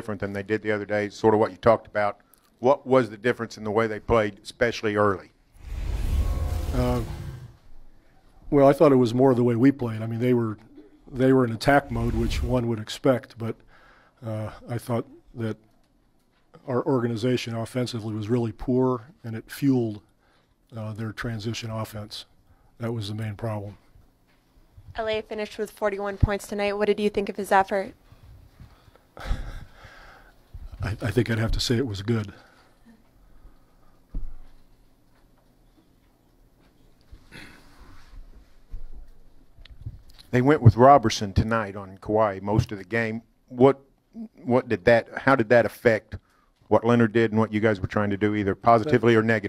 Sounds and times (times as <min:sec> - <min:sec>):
Speech: 0:00.0 - 0:05.3, 0:08.5 - 0:13.6, 0:14.2 - 0:15.6, 0:16.6 - 0:20.0, 0:20.7 - 0:23.8, 0:30.7 - 0:32.4, 0:40.3 - 0:49.4.